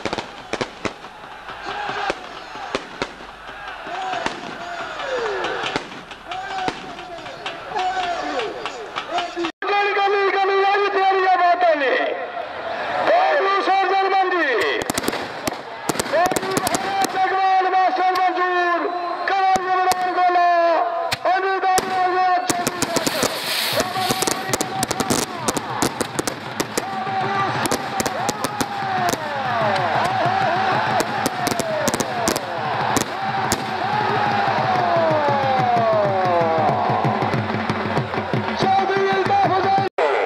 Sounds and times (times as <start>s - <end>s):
Outside, rural or natural: 0.0s - 10.0s, 14.6s - 40.2s
Speech: 6.3s - 12.3s, 13.1s - 14.9s, 16.1s - 25.5s, 38.6s - 40.2s.